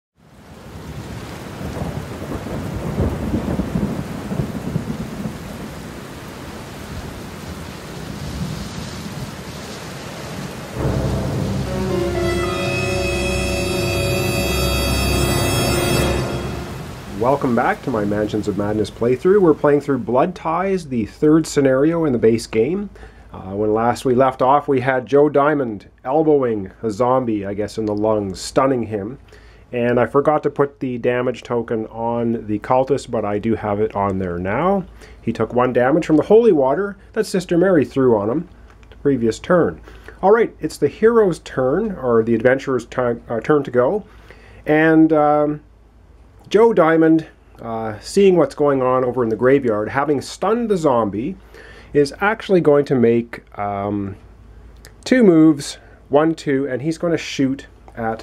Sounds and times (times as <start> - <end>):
Rain: 0.2 - 58.2
Thunder: 1.6 - 5.7, 8.1 - 17.1.